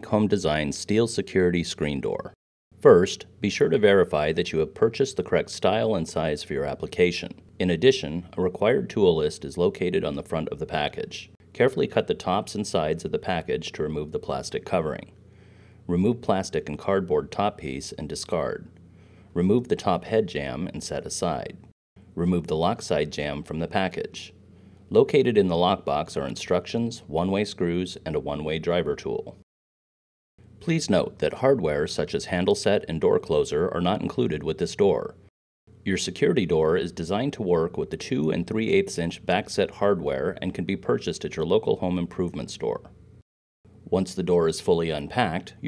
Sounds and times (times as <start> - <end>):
Speech: 0.0 - 15.2, 15.9 - 18.7, 19.4 - 29.4, 30.6 - 35.2, 35.8 - 43.0, 43.9 - 45.6.